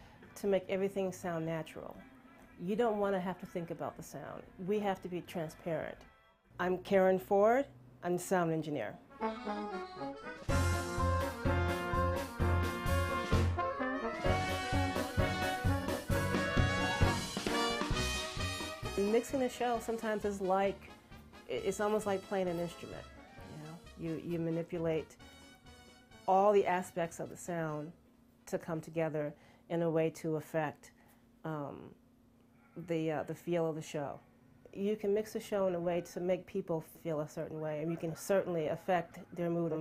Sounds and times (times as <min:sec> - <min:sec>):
Speech: 0:00.3 - 0:06.0, 0:06.6 - 0:09.0, 0:19.0 - 0:20.9, 0:21.5 - 0:25.1, 0:26.3 - 0:32.0, 0:32.8 - 0:39.8.